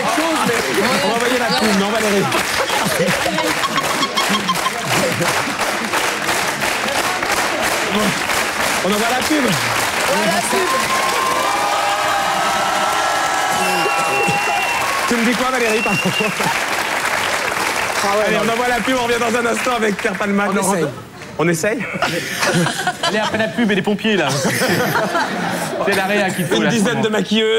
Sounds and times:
Applause: 0.0 - 20.8
Laughter: 1.4 - 5.6, 15.8 - 16.7, 21.9 - 27.0.

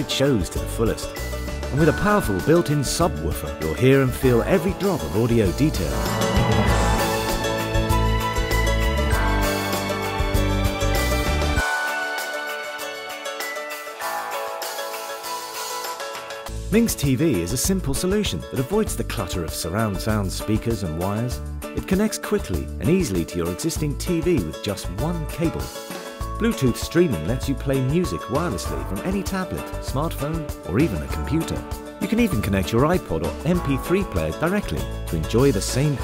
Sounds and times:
Speech: 0.0 - 6.0, 16.7 - 25.8, 26.4 - 36.0
Music: 0.0 - 36.0
Sound effect: 5.9 - 7.8.

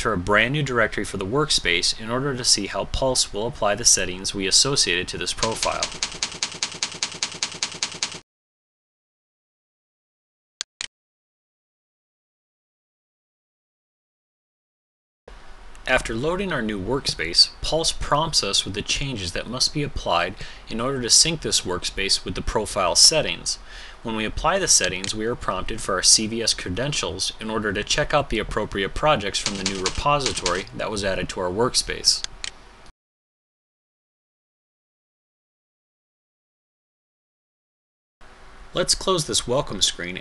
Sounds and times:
Speech: 0.0 - 5.9, 15.8 - 32.3, 38.8 - 40.2.

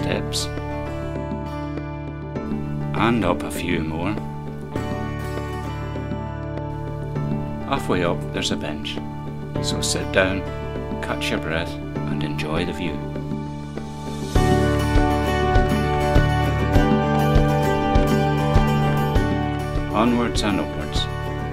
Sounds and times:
Speech: 0.0 - 0.5, 2.9 - 4.2, 7.7 - 9.0, 9.6 - 13.0, 19.9 - 21.1
Music: 0.0 - 21.5.

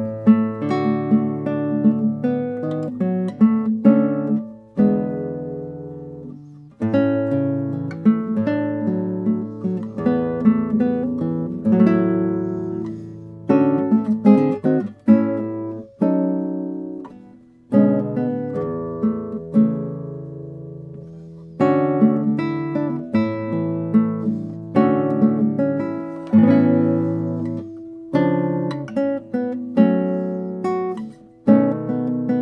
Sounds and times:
Acoustic guitar: 0.0 - 32.4
Strum: 0.0 - 32.4.

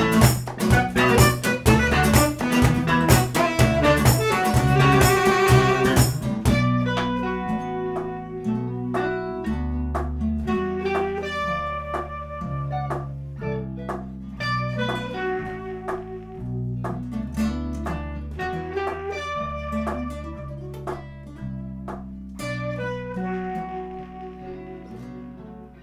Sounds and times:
Saxophone: 0.0 - 9.6, 10.4 - 17.1, 17.8 - 21.8, 22.4 - 25.8.

